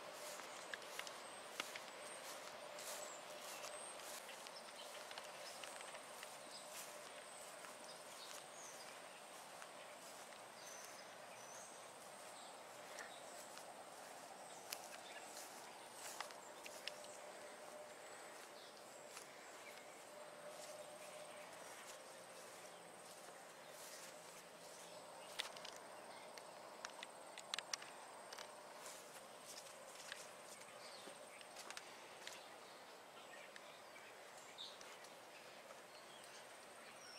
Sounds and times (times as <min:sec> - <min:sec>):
Walk, footsteps: 0:00.2 - 0:25.8, 0:26.4 - 0:32.5.